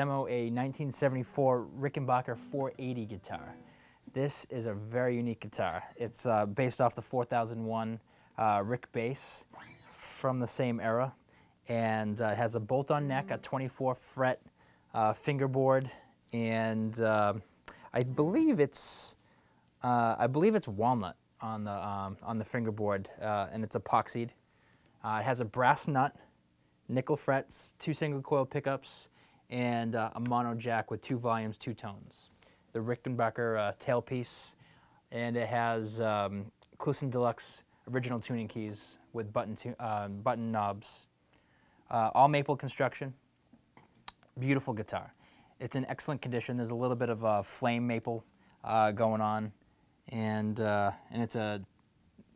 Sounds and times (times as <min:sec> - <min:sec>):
Speech: 0:00.0 - 0:19.2, 0:19.8 - 0:24.4, 0:25.0 - 0:26.3, 0:26.9 - 0:41.1, 0:41.9 - 0:43.2, 0:44.3 - 0:52.3.